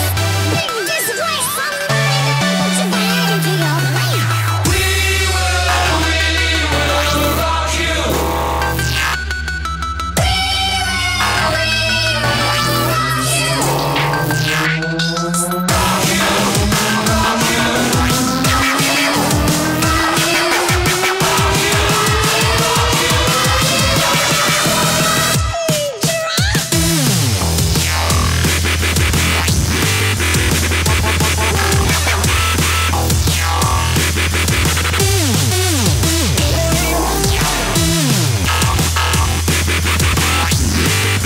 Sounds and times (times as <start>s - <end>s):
Dubstep: 0.0s - 41.2s.